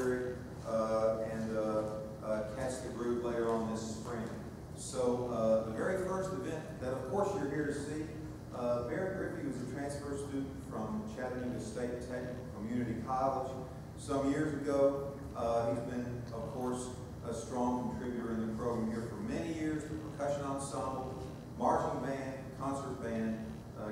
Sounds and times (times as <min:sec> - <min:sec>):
Speech: 0:00.0 - 0:23.9.